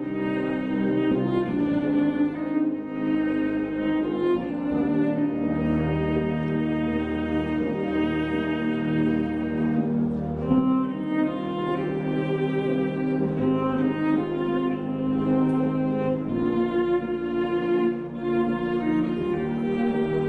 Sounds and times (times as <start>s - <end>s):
Cello: 0.0s - 20.2s.